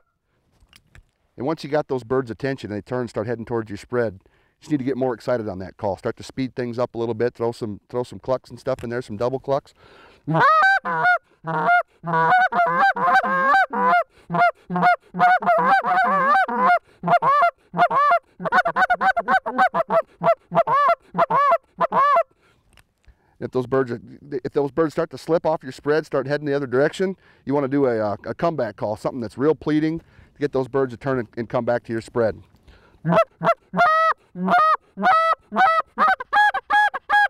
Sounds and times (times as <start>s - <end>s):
Speech: 1.4s - 9.7s, 23.4s - 32.5s
Honk: 10.3s - 22.2s, 33.1s - 37.3s.